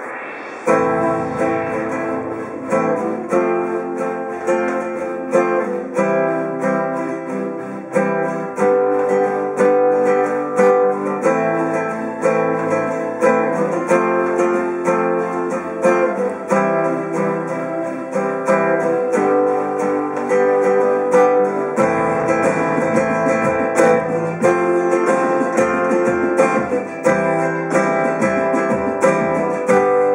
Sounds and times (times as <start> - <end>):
Flamenco: 0.0 - 30.1.